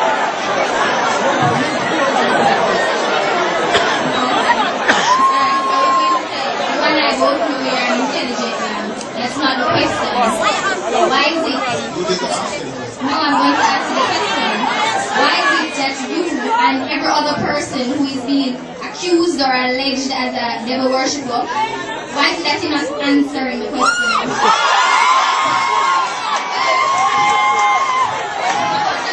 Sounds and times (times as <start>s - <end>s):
Inside, large room or hall: 0.0s - 29.1s
Inside, public space: 0.0s - 29.1s
Speech: 4.0s - 24.3s.